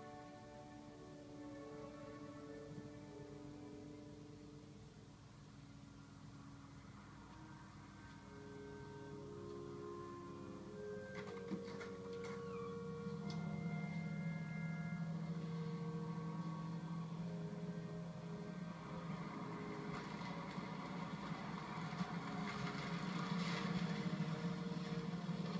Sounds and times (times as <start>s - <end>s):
Music: 0.0s - 25.6s.